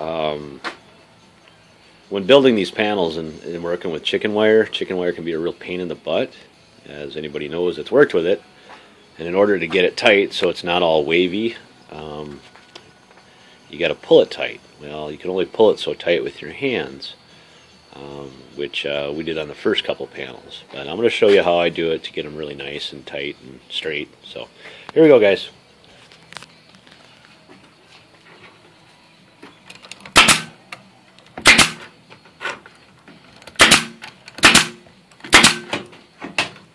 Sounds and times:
Speech: 0:02.1 - 0:08.4, 0:09.2 - 0:12.4, 0:13.7 - 0:17.2, 0:18.0 - 0:25.6.

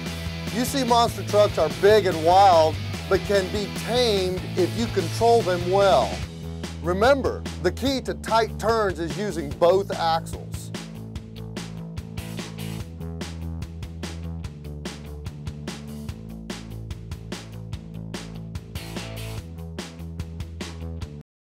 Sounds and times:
Music: 0:00.0 - 0:21.2.

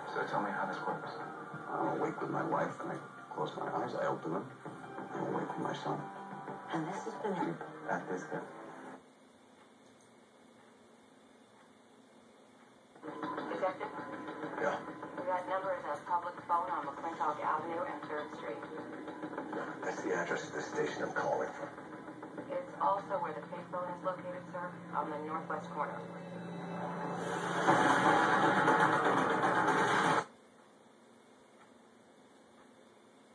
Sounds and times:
Television: 0:00.0 - 0:33.3
Speech: 0:14.6 - 0:18.6, 0:22.5 - 0:26.1.

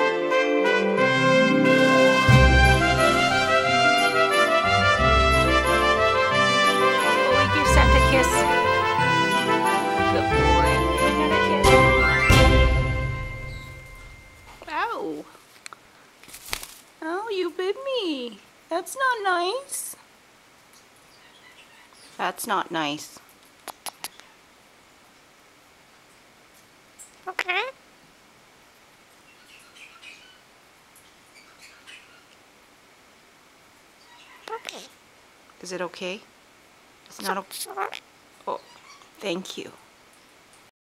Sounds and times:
Speech: 0:07.4 - 0:08.7, 0:14.6 - 0:15.4, 0:17.0 - 0:20.0, 0:22.2 - 0:23.2, 0:27.3 - 0:27.8, 0:34.5 - 0:34.9, 0:35.6 - 0:36.3, 0:37.1 - 0:39.8
Bird: 0:21.1 - 0:22.2, 0:29.3 - 0:32.4, 0:34.0 - 0:34.9
Domestic animals, pets: 0:21.2 - 0:22.2, 0:23.7 - 0:24.5, 0:31.3 - 0:32.4, 0:34.0 - 0:35.0, 0:37.2 - 0:39.2.

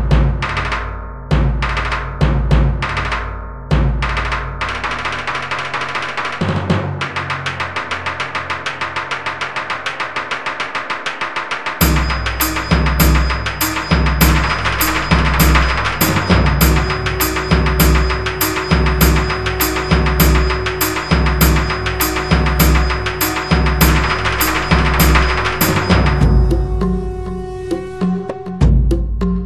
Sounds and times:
Bass drum: 0:00.0 - 0:04.5, 0:11.8 - 0:27.5
Background music: 0:00.0 - 0:29.4
Drum kit: 0:00.0 - 0:29.4
Theme music: 0:11.8 - 0:29.0.

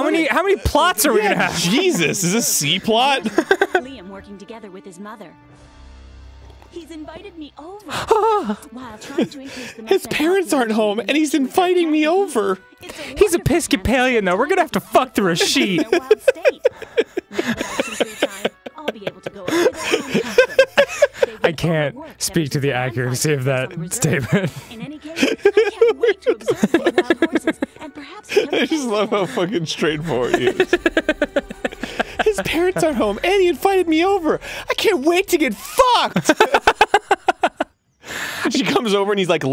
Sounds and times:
Speech: 0:00.0 - 0:05.3, 0:08.7 - 0:16.7, 0:17.4 - 0:20.4, 0:21.2 - 0:30.8, 0:32.2 - 0:36.2, 0:38.5 - 0:39.5.

